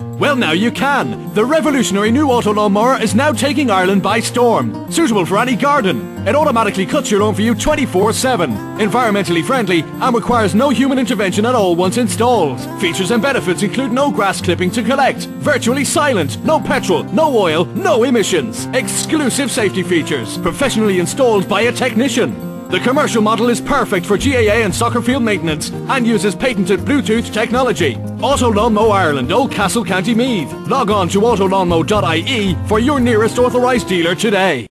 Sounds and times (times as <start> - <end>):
Music: 0.0 - 34.7
Speech: 0.2 - 34.7.